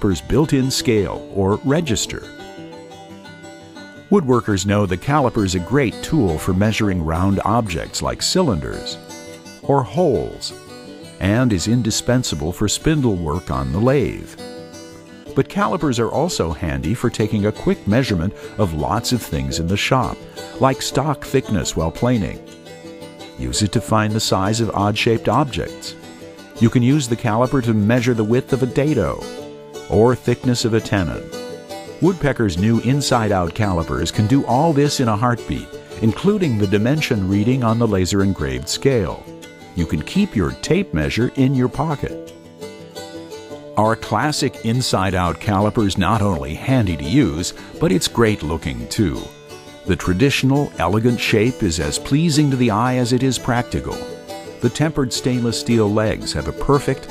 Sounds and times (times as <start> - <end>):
Speech: 0.0 - 2.3, 4.1 - 9.0, 9.6 - 10.6, 11.2 - 14.4, 15.3 - 22.4, 23.4 - 26.0, 26.6 - 29.3, 29.9 - 31.3, 32.0 - 42.2, 43.8 - 49.3, 49.9 - 57.1
Music: 0.0 - 57.1.